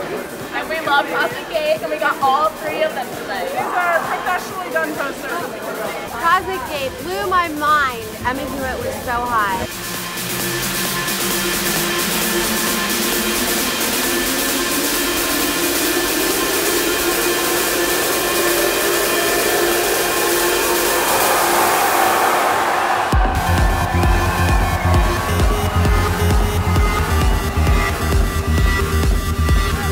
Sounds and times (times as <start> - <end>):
Music: 0.0 - 29.9.